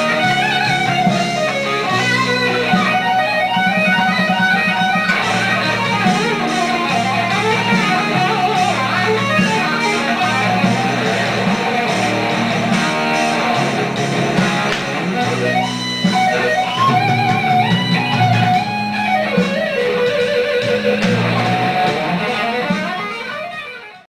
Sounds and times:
Electric guitar: 0.0 - 24.0
Strum: 0.0 - 24.0.

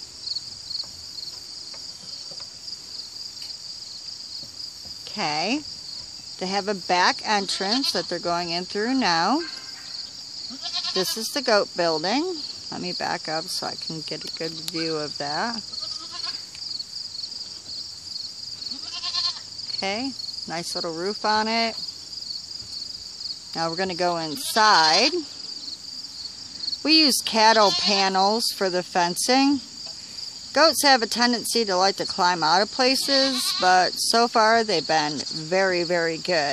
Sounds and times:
Speech: 5.1 - 5.6, 6.4 - 9.5, 11.0 - 15.6, 19.7 - 21.8, 23.6 - 25.3, 26.9 - 29.6, 30.6 - 36.5
Bleat: 7.4 - 8.1, 9.4 - 11.3, 15.6 - 16.5, 18.7 - 19.5, 24.2 - 25.3, 27.5 - 28.1, 32.9 - 33.9.

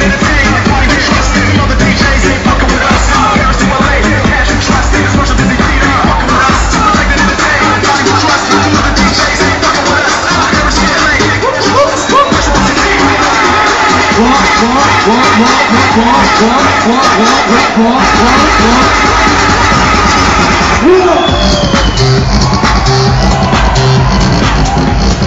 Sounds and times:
Techno: 0.0 - 25.2.

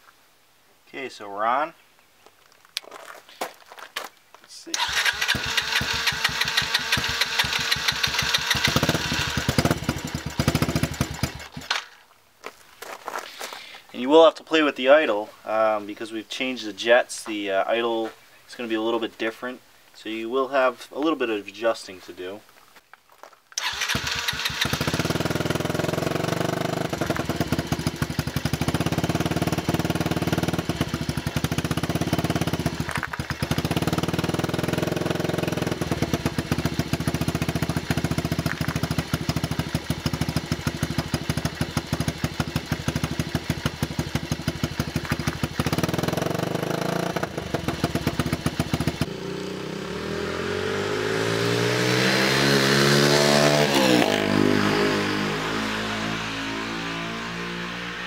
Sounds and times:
Outside, urban or manmade: 0.0 - 58.0
Speech: 0.9 - 1.8, 4.5 - 4.8, 13.9 - 22.5
Motorcycle: 4.7 - 12.0, 23.6 - 58.0.

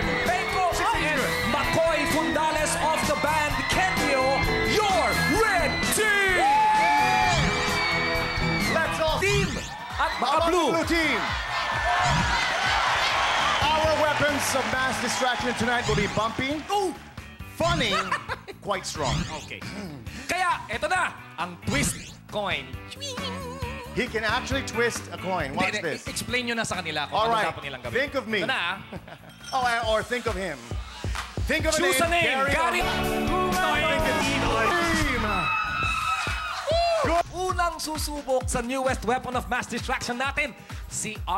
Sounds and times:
Music: 0.0 - 41.3
Shout: 0.1 - 16.0, 33.6 - 37.2
Laughter: 17.8 - 18.6, 28.4 - 29.5.

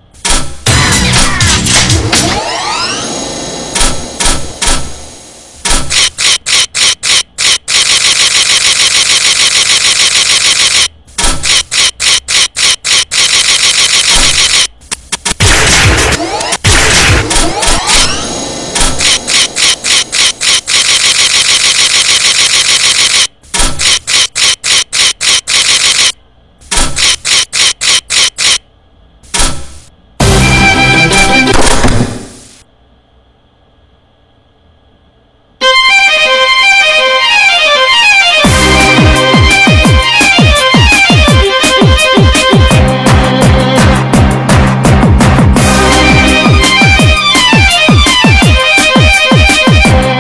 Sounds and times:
Music: 0.6 - 3.2, 30.2 - 32.0, 35.6 - 50.2.

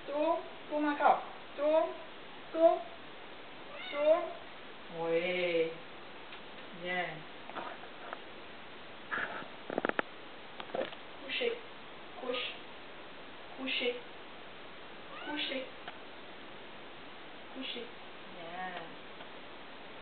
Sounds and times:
Speech: 0.0 - 3.0, 3.9 - 5.8, 6.7 - 7.3, 11.2 - 11.6, 12.2 - 12.6, 13.6 - 14.1, 15.2 - 15.8, 17.6 - 19.0
Meow: 3.7 - 4.3, 15.1 - 15.5.

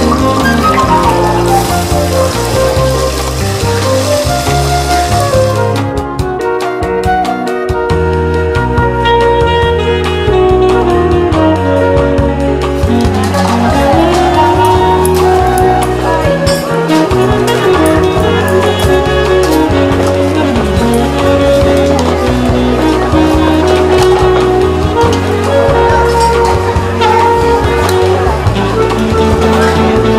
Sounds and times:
Music: 0.0 - 30.1.

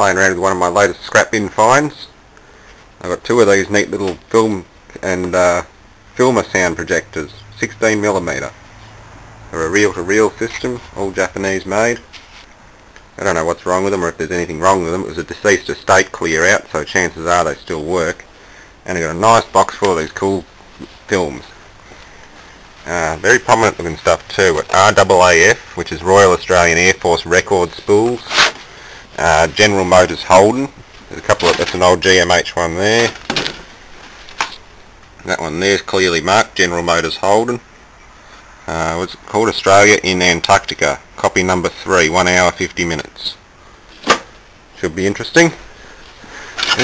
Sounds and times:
Speech: 0.0 - 2.2, 3.0 - 8.6, 9.5 - 12.1, 13.2 - 21.6, 22.8 - 28.4, 29.2 - 33.2, 35.2 - 37.7, 38.6 - 43.4, 44.8 - 45.6.

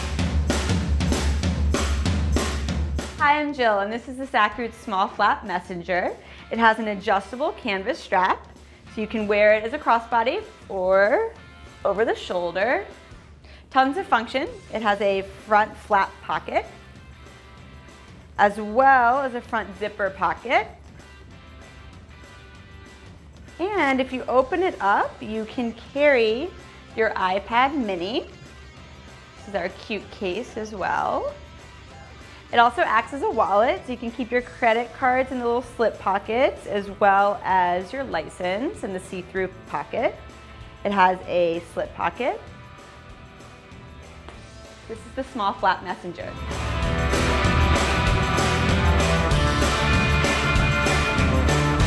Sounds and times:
Music: 0.0 - 51.8
Speech: 3.2 - 8.4, 9.0 - 12.9, 13.8 - 16.8, 18.4 - 20.8, 23.6 - 28.3, 29.5 - 31.4, 32.5 - 40.2, 40.9 - 42.5, 44.9 - 46.4.

